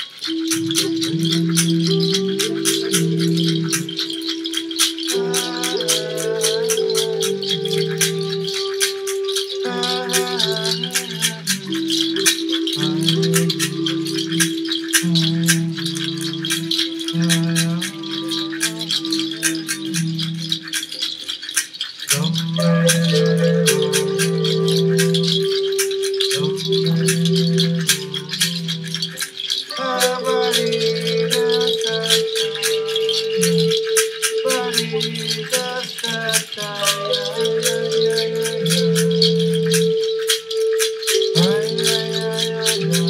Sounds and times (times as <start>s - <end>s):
Music: 0.0s - 43.0s.